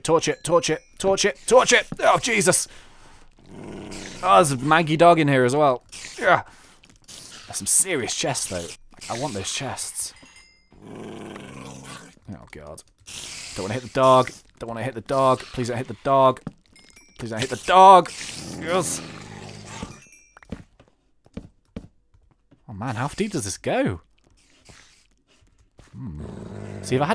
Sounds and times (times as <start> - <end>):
Speech: 0.0 - 2.7, 4.2 - 6.4, 7.5 - 10.1, 12.3 - 12.8, 13.6 - 16.4, 17.2 - 19.0, 22.7 - 24.0, 26.8 - 27.1.